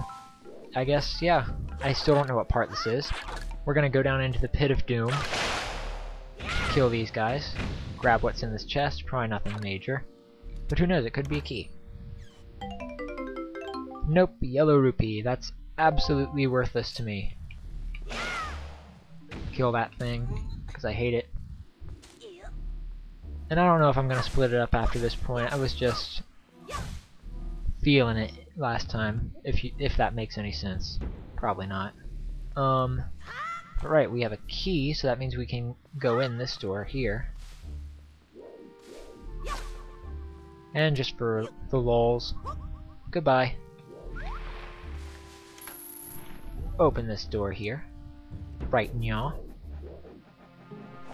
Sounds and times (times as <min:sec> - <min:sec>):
Speech: 0:00.8 - 0:05.3, 0:06.5 - 0:10.1, 0:10.7 - 0:11.7, 0:14.1 - 0:17.3, 0:19.5 - 0:21.3, 0:23.5 - 0:26.2, 0:27.8 - 0:32.0, 0:32.6 - 0:37.3, 0:40.8 - 0:42.5, 0:43.1 - 0:43.6, 0:46.7 - 0:47.9, 0:48.7 - 0:49.4.